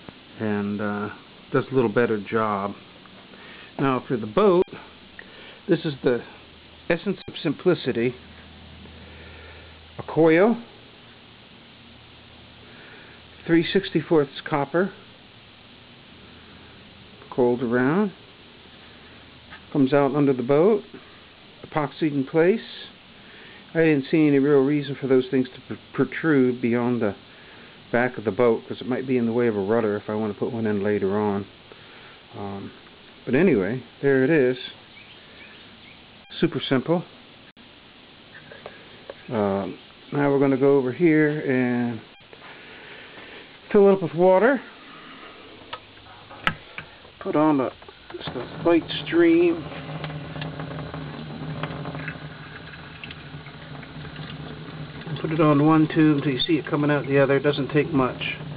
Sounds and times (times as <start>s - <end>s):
Speech: 0.4s - 2.8s, 3.8s - 4.9s, 5.7s - 8.2s, 10.0s - 10.7s, 13.4s - 15.0s, 17.3s - 18.2s, 19.7s - 21.0s, 21.6s - 23.0s, 23.7s - 27.2s, 27.9s - 31.6s, 32.3s - 34.8s, 36.3s - 37.1s, 39.3s - 42.1s, 43.7s - 44.7s, 47.2s - 49.8s, 55.1s - 58.4s.